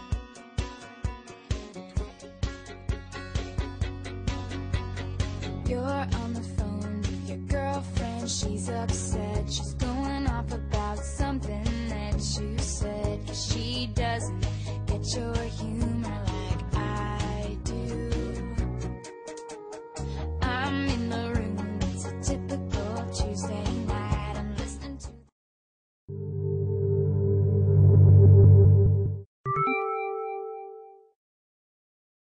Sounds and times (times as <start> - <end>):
Music: 0.0 - 25.3, 27.4 - 31.2.